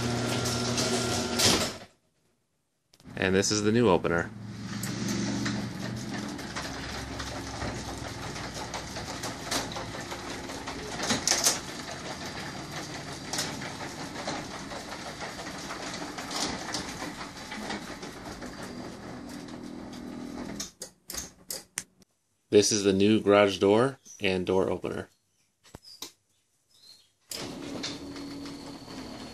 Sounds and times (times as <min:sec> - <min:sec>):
Sliding door: 0:00.0 - 0:01.9, 0:03.1 - 0:21.4, 0:27.3 - 0:29.3.